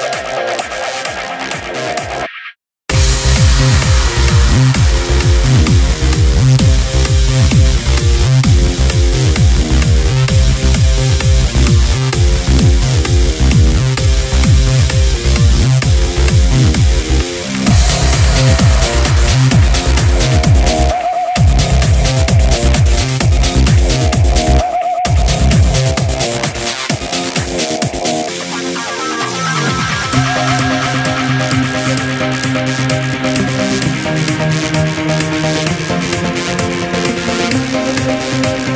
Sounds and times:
Techno: 0.0s - 2.3s, 2.9s - 38.7s.

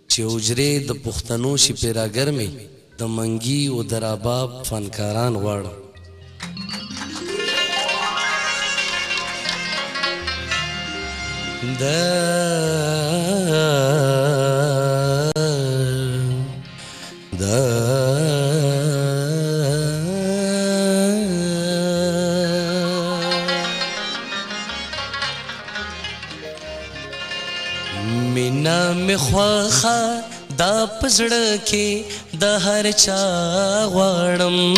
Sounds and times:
Speech: 0.0s - 5.9s
Music: 2.4s - 34.7s.

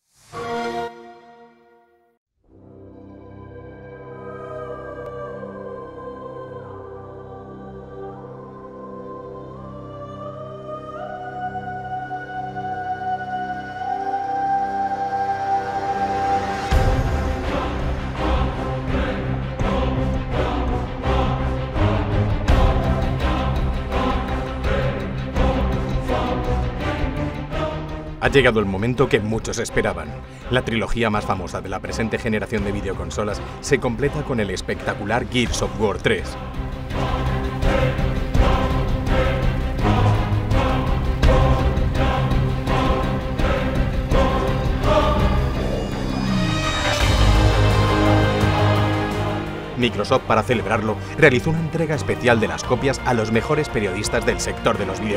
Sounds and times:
Music: 0.0s - 55.1s
Speech: 28.2s - 36.4s, 49.8s - 55.1s.

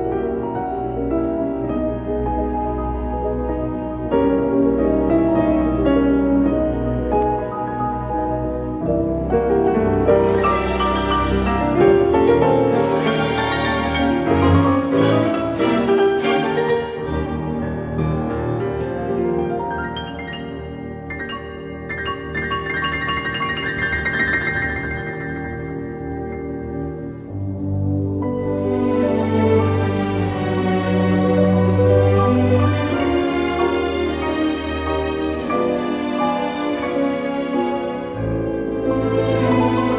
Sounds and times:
Piano: 0.0s - 39.9s.

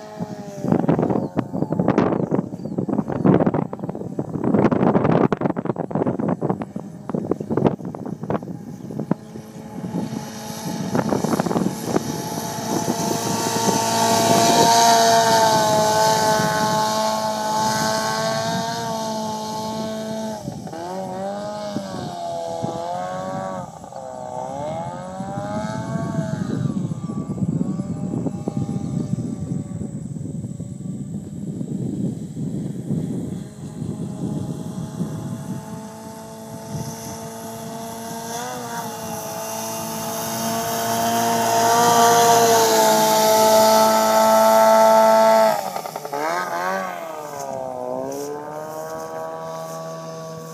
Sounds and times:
Motorboat, speedboat: 0.0s - 50.5s.

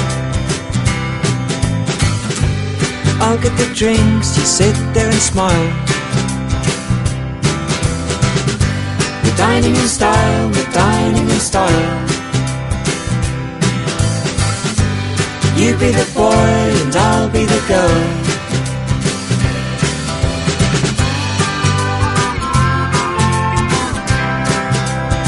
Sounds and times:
Music: 0.0s - 25.2s.

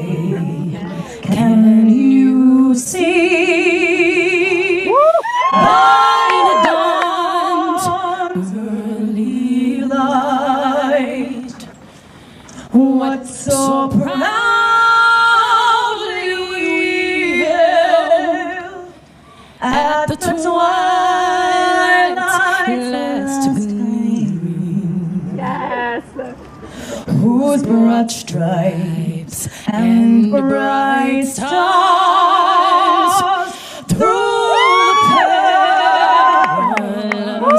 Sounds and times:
Female singing: 0.0s - 11.7s, 12.7s - 19.0s, 19.6s - 26.3s, 27.1s - 37.5s.

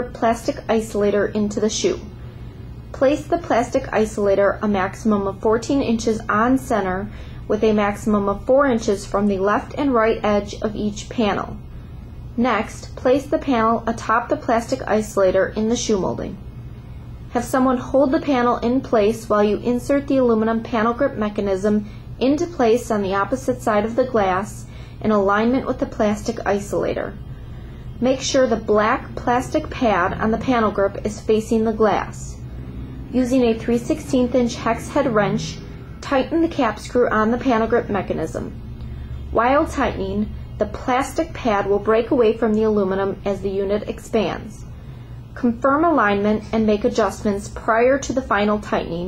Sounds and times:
Speech: 0.0s - 2.1s, 2.9s - 11.6s, 12.4s - 16.4s, 17.3s - 27.2s, 28.0s - 32.5s, 33.1s - 38.6s, 39.3s - 44.7s, 45.4s - 49.0s.

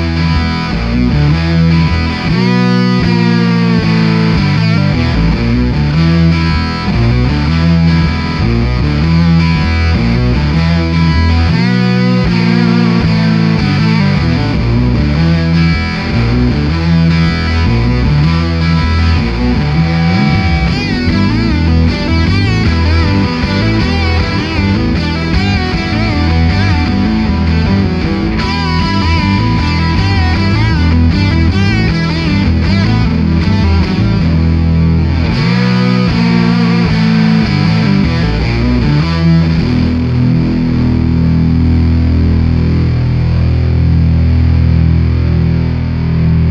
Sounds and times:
Distortion: 0.0s - 46.5s
Effects unit: 0.0s - 46.5s
Guitar: 0.0s - 46.5s
Heavy metal: 0.0s - 46.5s.

